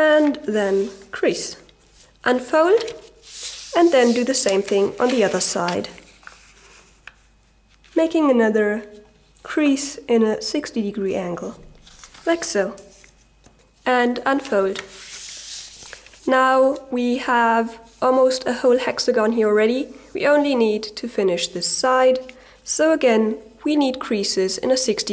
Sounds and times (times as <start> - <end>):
Speech: 0.0 - 3.0, 3.8 - 6.0, 8.0 - 11.7, 12.3 - 12.9, 13.8 - 14.8, 16.2 - 25.1.